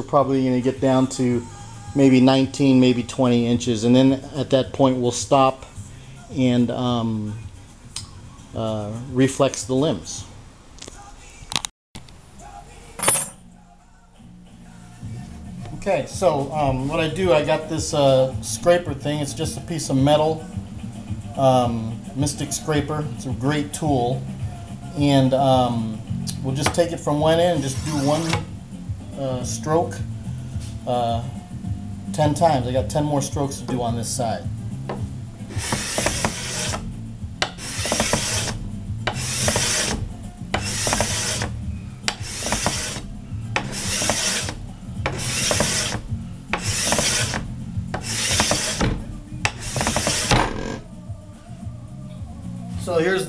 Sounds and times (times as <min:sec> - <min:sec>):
Filing (rasp): 0:27.6 - 0:28.5, 0:35.5 - 0:50.6
Wood: 0:27.6 - 0:28.5, 0:34.9 - 0:36.8, 0:37.4 - 0:41.5, 0:42.1 - 0:50.8
Rub: 0:35.5 - 0:36.8, 0:37.6 - 0:40.0, 0:40.6 - 0:41.5, 0:42.2 - 0:46.0, 0:46.6 - 0:47.4.